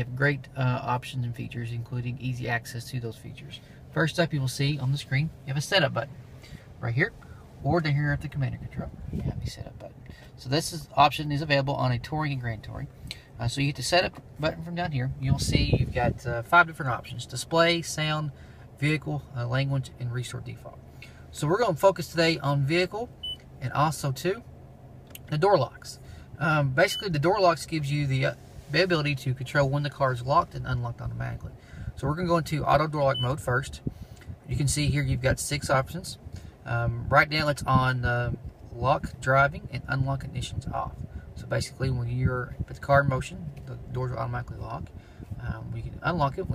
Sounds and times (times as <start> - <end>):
Speech: 0.0 - 6.1, 6.8 - 24.5, 25.2 - 33.9, 34.5 - 46.5.